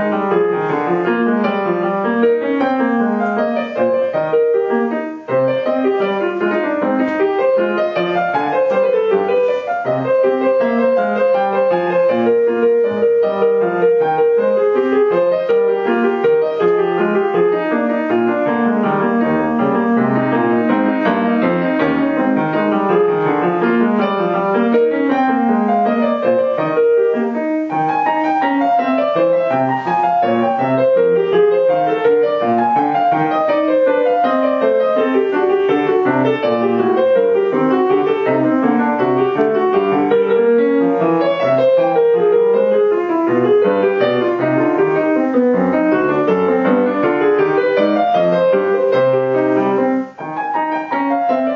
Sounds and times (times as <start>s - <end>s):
Music: 0.0s - 51.5s.